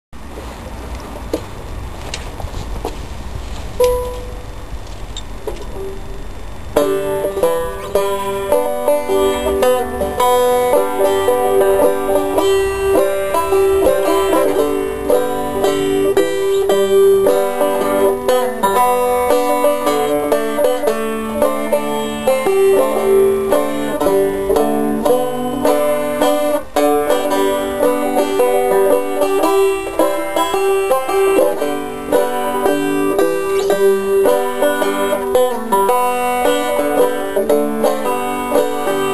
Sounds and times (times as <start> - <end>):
Bowed string instrument: 5.5 - 39.1
Banjo: 6.6 - 39.1.